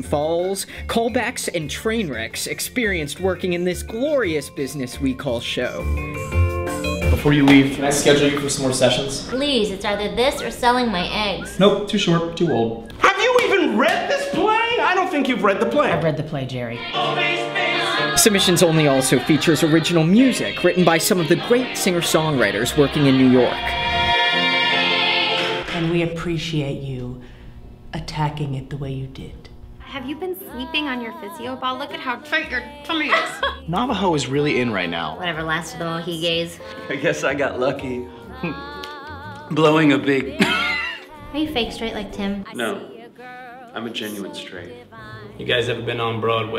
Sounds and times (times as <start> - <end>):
Music: 0.0 - 26.7, 29.6 - 46.5.